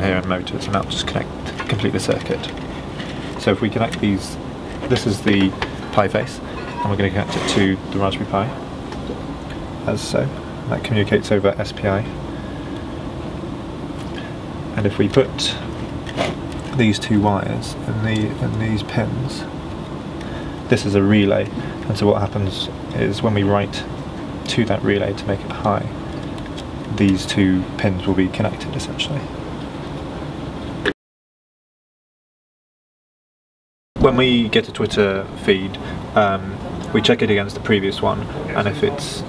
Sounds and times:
Speech: 0:00.0 - 0:02.6, 0:03.4 - 0:08.6, 0:09.8 - 0:12.2, 0:14.7 - 0:15.7, 0:16.7 - 0:19.5, 0:20.7 - 0:23.9, 0:24.5 - 0:26.0, 0:26.9 - 0:29.3, 0:34.0 - 0:39.2.

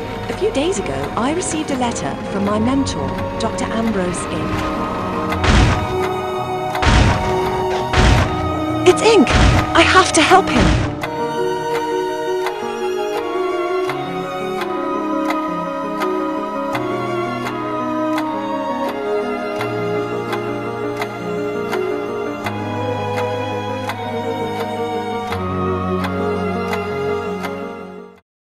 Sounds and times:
Music: 0:00.0 - 0:28.2
Speech: 0:08.8 - 0:10.7.

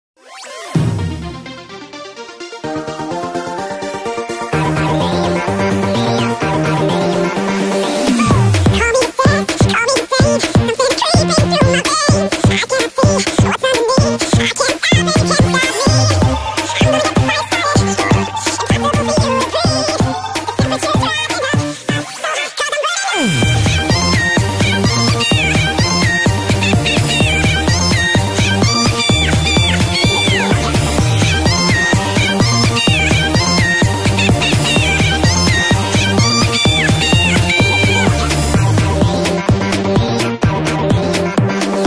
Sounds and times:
Music: 0:00.2 - 0:41.8.

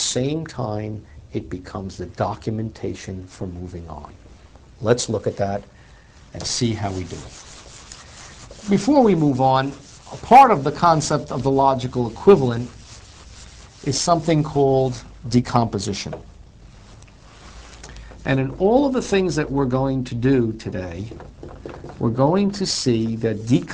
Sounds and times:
Rub: 0:06.3 - 0:15.2, 0:16.7 - 0:17.9, 0:21.4 - 0:23.7.

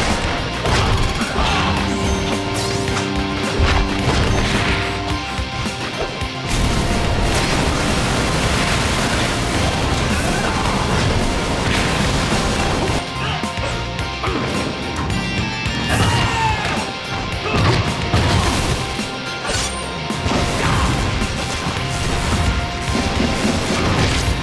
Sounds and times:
Music: 0:00.0 - 0:24.4
Smash, crash: 0:05.8 - 0:13.0, 0:17.5 - 0:24.4.

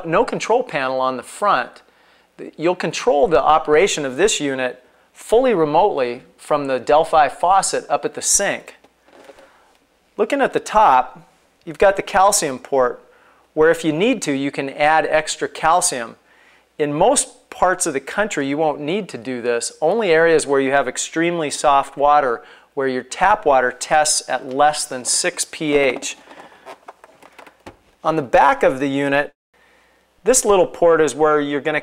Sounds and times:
Speech: 0:00.0 - 0:08.8, 0:10.2 - 0:13.0, 0:13.6 - 0:16.2, 0:16.8 - 0:26.2, 0:28.0 - 0:29.4, 0:30.2 - 0:31.8.

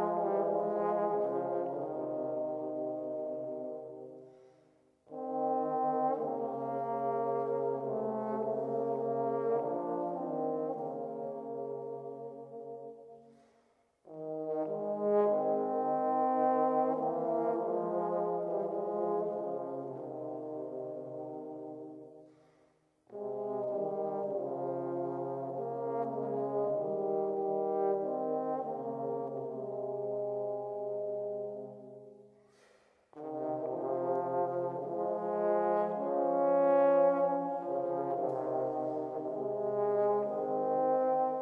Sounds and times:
Trombone: 0:00.0 - 0:04.2, 0:05.1 - 0:13.1, 0:14.1 - 0:22.1, 0:23.1 - 0:32.0, 0:33.2 - 0:41.4.

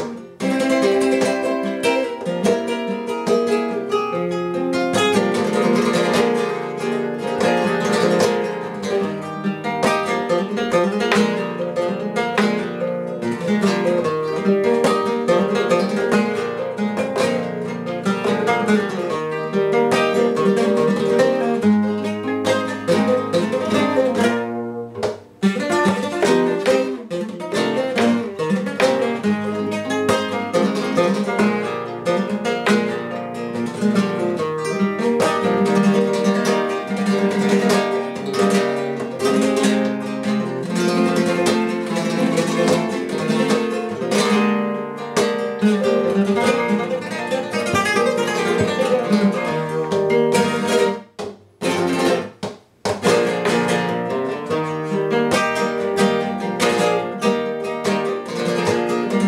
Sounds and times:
Acoustic guitar: 0:00.0 - 0:59.2
Strum: 0:00.0 - 0:59.2.

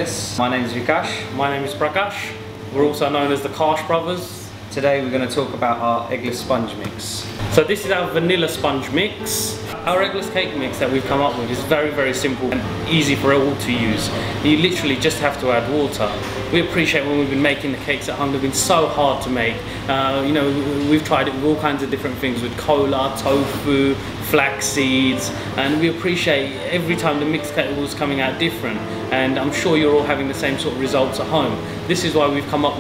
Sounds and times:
Music: 0:00.0 - 0:32.8
Speech: 0:00.0 - 0:32.8.

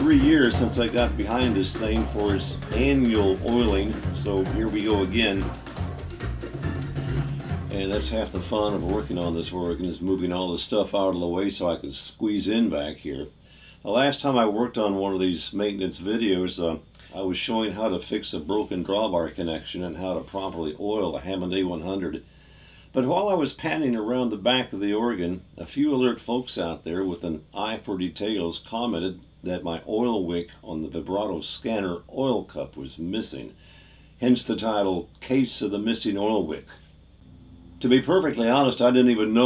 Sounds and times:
Speech: 0:00.0 - 0:05.6, 0:07.7 - 0:22.2, 0:22.9 - 0:33.6, 0:34.2 - 0:36.8, 0:37.8 - 0:39.4.

